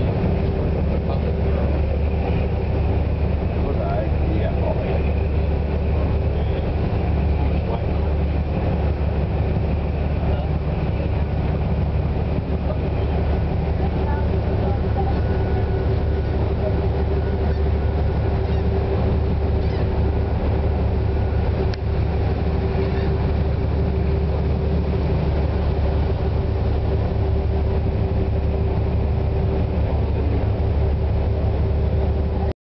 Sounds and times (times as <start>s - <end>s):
Motorboat, speedboat: 0.0s - 32.5s
Ship: 0.0s - 32.6s.